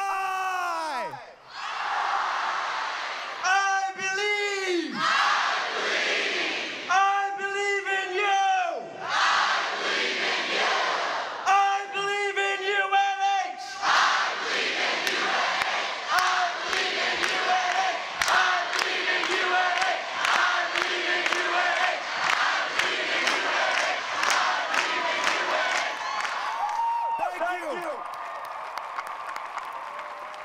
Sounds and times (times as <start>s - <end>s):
Speech: 3.5s - 5.0s, 6.9s - 8.9s, 11.5s - 13.7s, 27.2s - 28.0s.